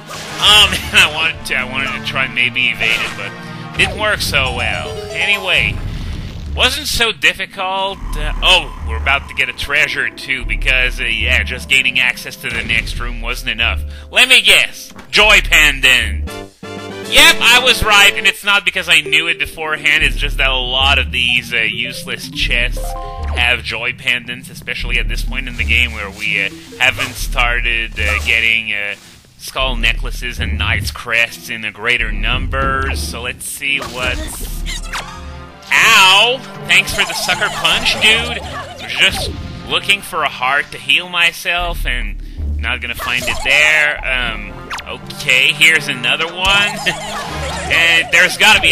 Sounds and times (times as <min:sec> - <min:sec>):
Speech: 0:00.4 - 0:05.8, 0:06.6 - 0:16.3, 0:17.1 - 0:34.8, 0:35.7 - 0:48.7.